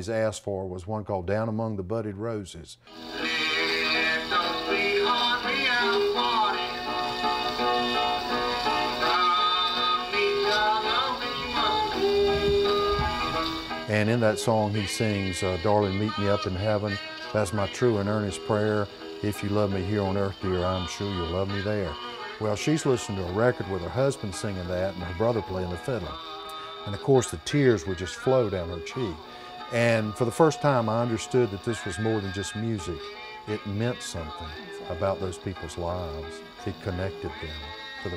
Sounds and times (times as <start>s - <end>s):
Country: 0.0s - 38.1s
Musical instrument: 2.9s - 38.1s.